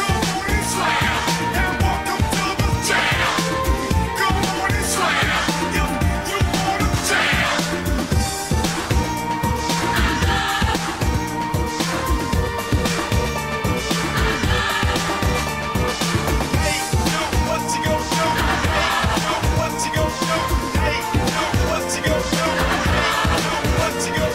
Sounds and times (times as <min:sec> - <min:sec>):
Music: 0:00.0 - 0:24.3.